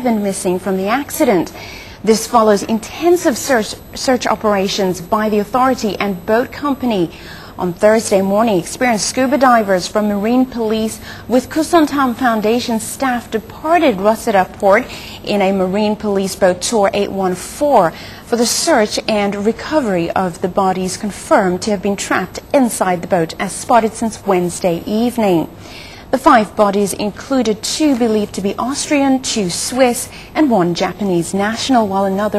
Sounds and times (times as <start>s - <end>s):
Speech: 0.0s - 25.5s, 26.2s - 32.3s.